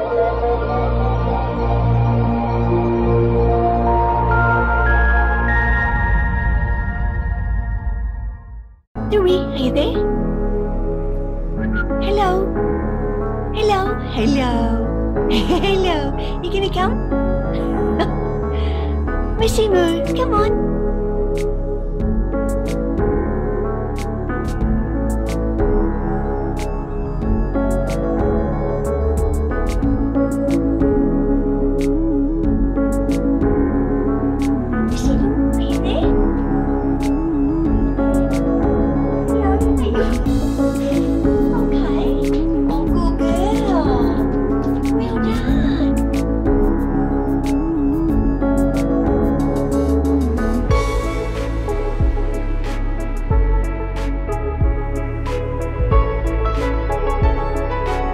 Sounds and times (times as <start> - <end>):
Music: 0.0 - 58.1.